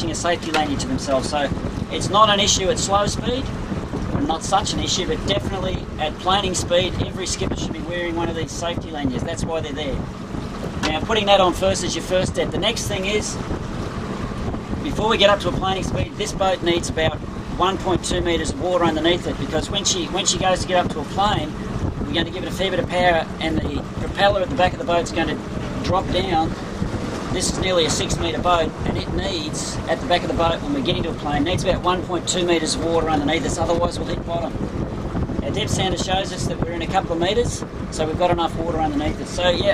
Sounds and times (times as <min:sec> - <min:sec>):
Speech: 0:00.0 - 0:03.5, 0:04.2 - 0:10.0, 0:10.8 - 0:13.4, 0:14.9 - 0:26.6, 0:27.3 - 0:34.6, 0:35.4 - 0:39.7.